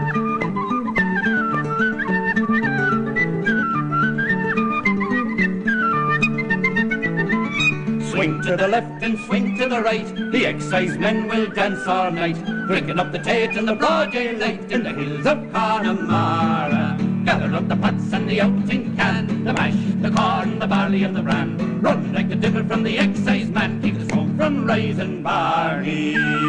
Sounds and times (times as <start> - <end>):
Flute: 0.0 - 18.8, 19.6 - 26.4.